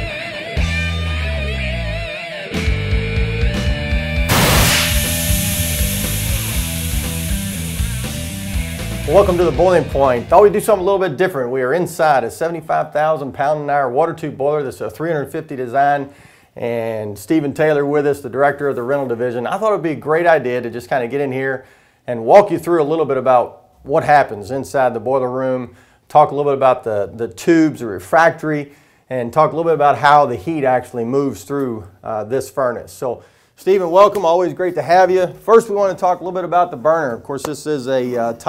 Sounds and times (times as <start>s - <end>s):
Speech: 9.1s - 38.4s.